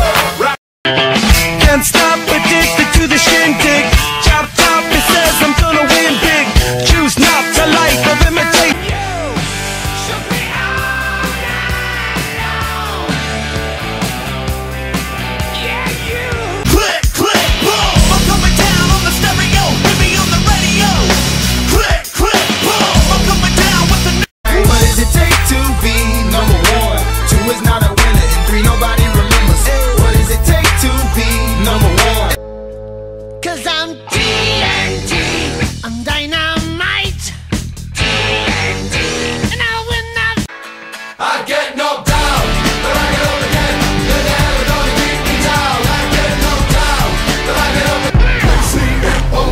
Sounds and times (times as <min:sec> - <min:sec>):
Music: 0:00.0 - 0:49.5.